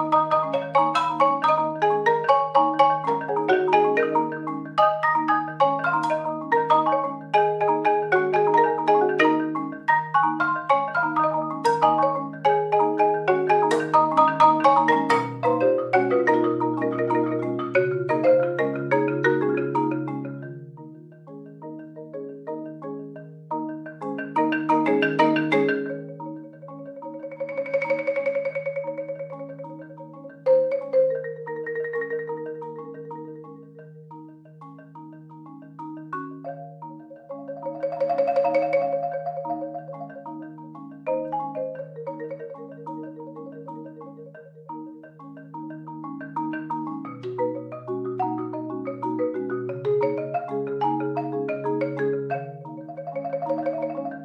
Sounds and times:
Marimba, xylophone: 0.0 - 54.2.

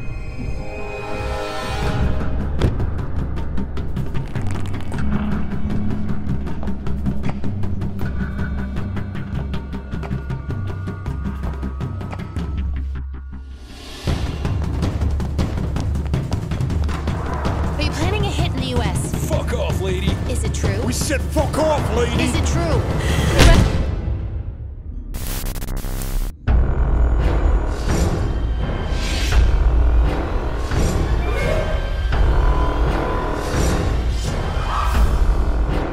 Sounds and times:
Music: 0.0 - 35.9
Speech: 17.8 - 22.8.

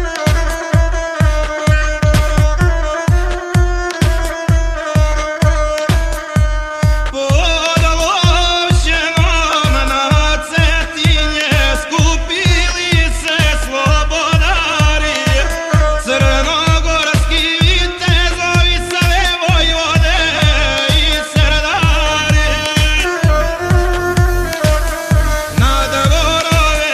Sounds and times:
Techno: 0.0 - 26.9.

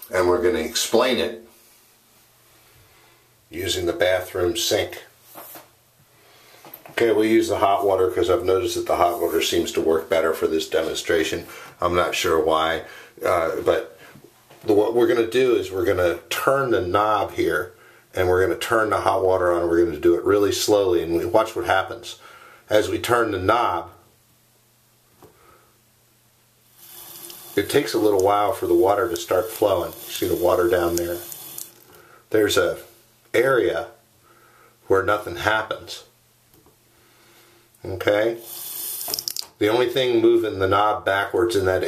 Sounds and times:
Sink (filling or washing): 26.7 - 32.0, 38.3 - 39.5
Water tap, faucet: 26.7 - 32.0, 38.4 - 39.5.

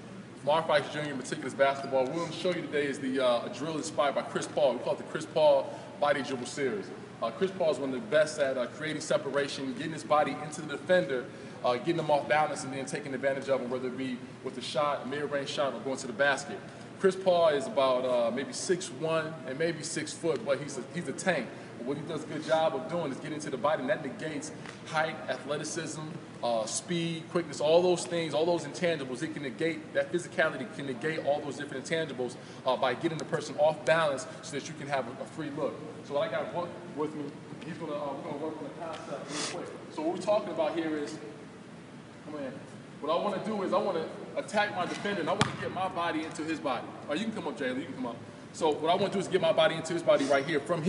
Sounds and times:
Speech: 0.4 - 41.4, 42.2 - 50.8.

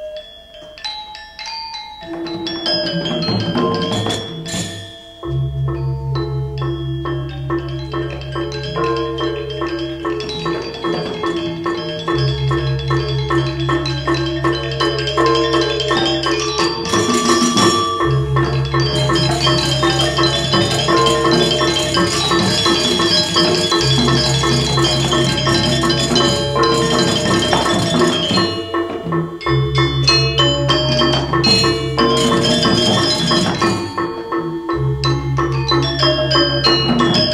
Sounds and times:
Glockenspiel: 0.0 - 37.3
Marimba, xylophone: 0.0 - 37.3.

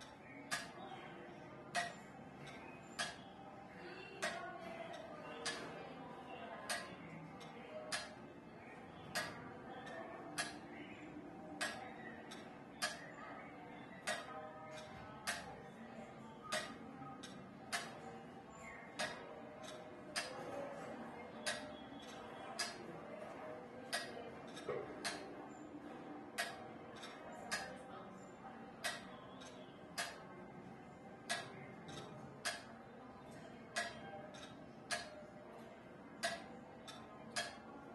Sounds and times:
Tick-tock: 0.5 - 0.8, 1.7 - 3.3, 4.2 - 5.7, 6.7 - 8.2, 9.2 - 10.6, 11.6 - 13.0, 14.0 - 15.5, 16.5 - 18.0, 19.0 - 20.3, 21.4 - 22.8, 23.9 - 25.3, 26.4 - 27.8, 28.8 - 30.2, 31.3 - 32.7, 33.8 - 35.2, 36.2 - 37.6
Tick: 10.4 - 10.6, 19.0 - 20.3, 21.5 - 22.8, 28.8 - 30.2, 31.3 - 32.6, 33.8 - 35.2, 36.2 - 37.6.

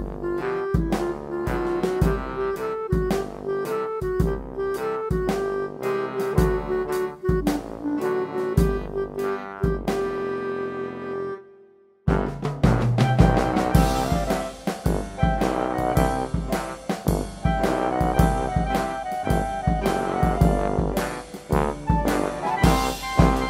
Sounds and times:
Music: 0.0 - 23.4.

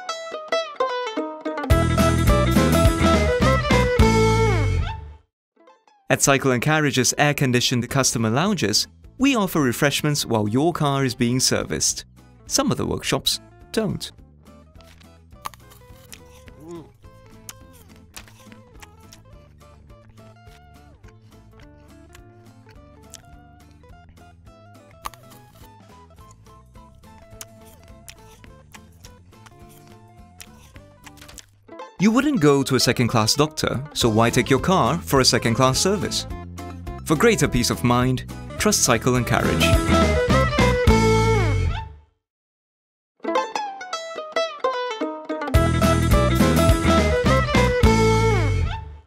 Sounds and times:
Music: 0.0 - 42.2, 43.2 - 49.0
Speech: 6.1 - 14.1, 16.6 - 17.0, 32.0 - 36.3, 37.1 - 39.8.

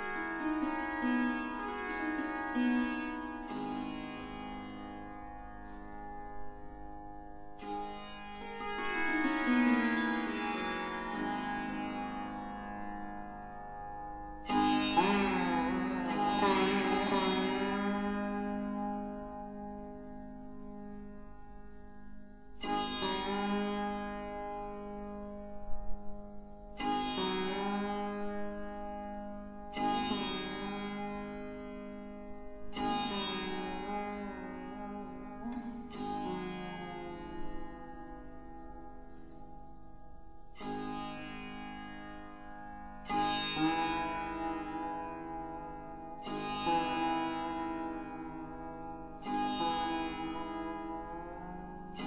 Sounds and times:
Sitar: 0.0 - 52.0.

